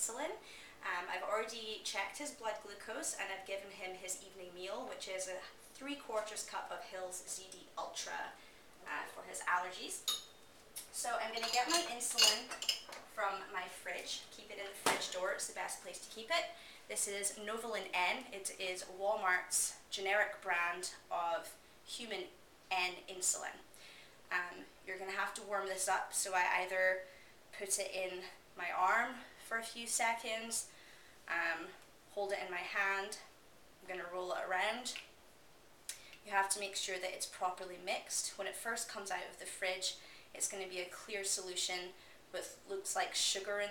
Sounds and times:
Speech: 0:00.0 - 0:10.1, 0:10.8 - 0:23.7, 0:24.3 - 0:30.7, 0:31.3 - 0:35.1, 0:36.2 - 0:43.7.

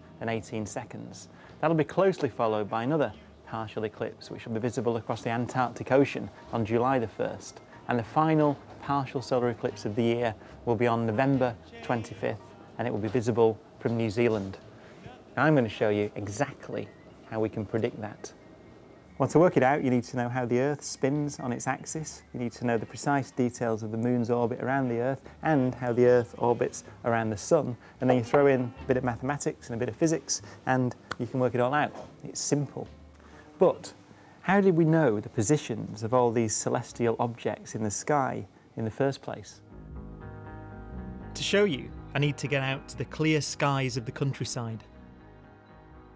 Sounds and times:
Speech: 0:00.2 - 0:18.4, 0:19.2 - 0:32.9, 0:33.6 - 0:39.6, 0:41.4 - 0:44.9.

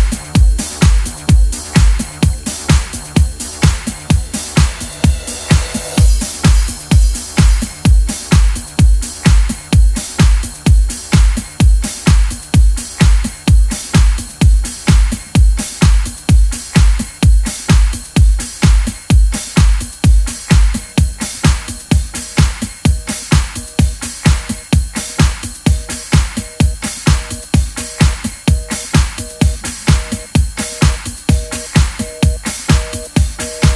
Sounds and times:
House music: 0:00.0 - 0:33.7.

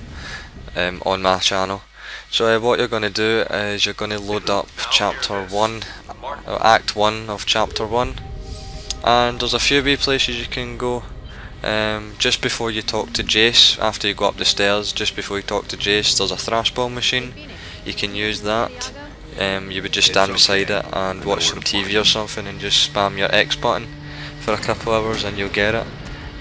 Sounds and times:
Music: 0:00.0 - 0:26.4
Speech: 0:00.8 - 0:08.2, 0:09.0 - 0:25.9.

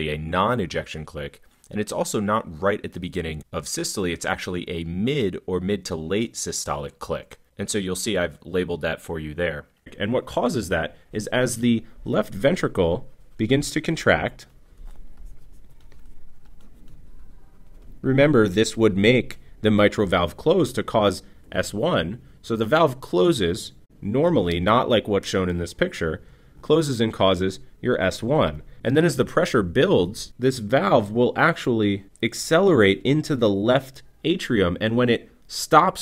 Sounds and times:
Speech: 0:00.0 - 0:14.6, 0:18.0 - 0:36.0.

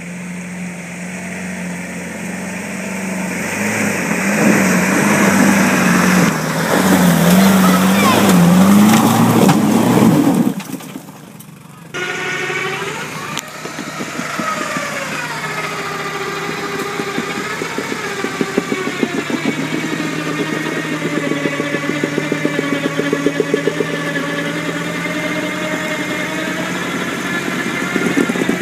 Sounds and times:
Vehicle: 0:00.0 - 0:28.6
Speech: 0:07.3 - 0:08.4.

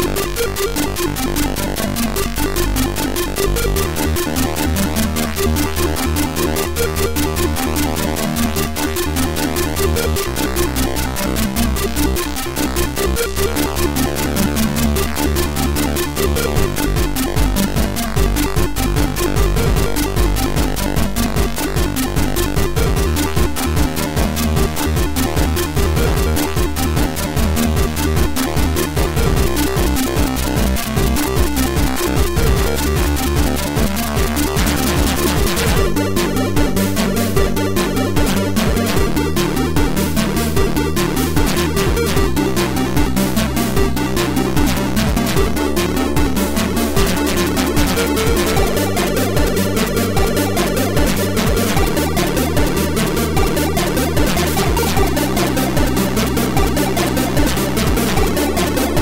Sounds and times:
Music: 0:00.0 - 0:59.0.

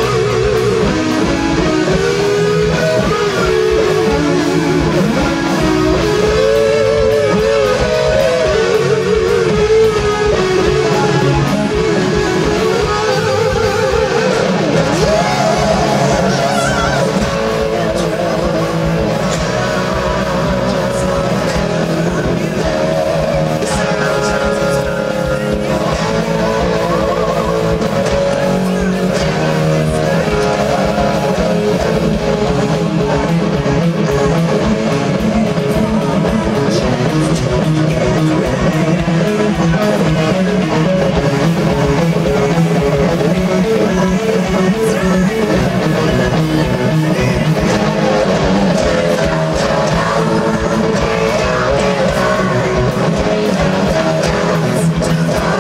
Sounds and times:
Electric guitar: 0:00.0 - 0:55.6.

